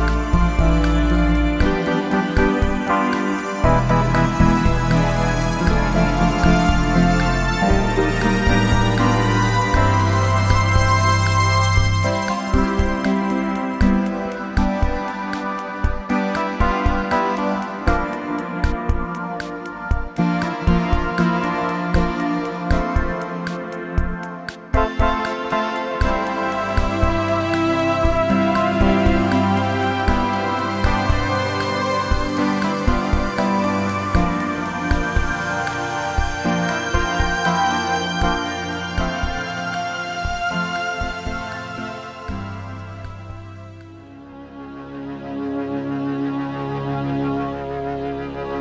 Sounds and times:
Music: 0.0s - 48.6s.

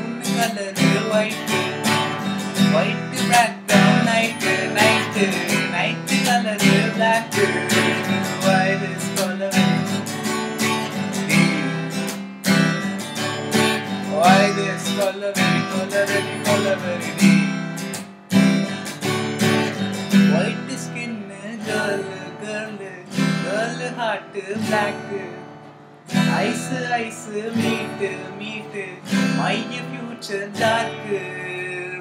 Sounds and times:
Acoustic guitar: 0.0s - 32.0s
Strum: 0.0s - 32.0s.

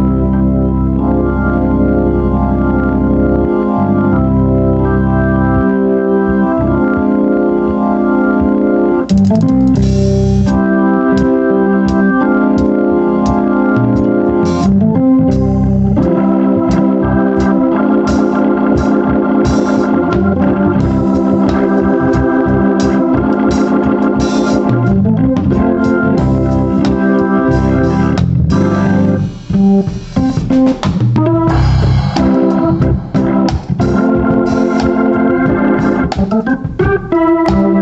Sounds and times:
Hammond organ: 0.0s - 37.8s.

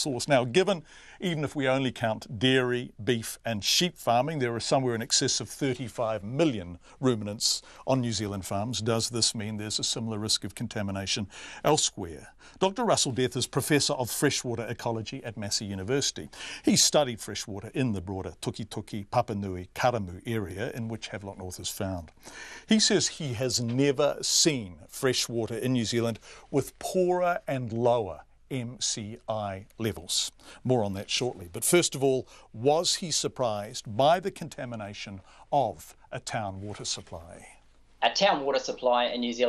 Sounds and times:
Speech: 0.0s - 22.1s, 22.7s - 39.4s.

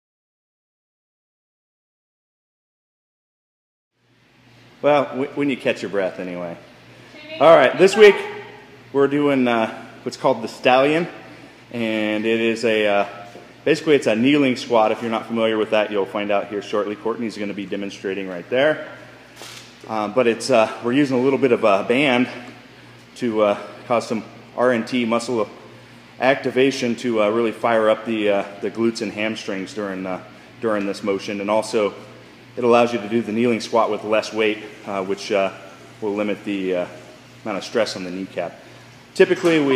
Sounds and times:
Speech: 7.2s - 8.4s, 11.8s - 18.9s, 19.9s - 22.5s, 23.2s - 25.6s, 26.2s - 32.0s, 32.6s - 38.6s, 39.2s - 39.7s.

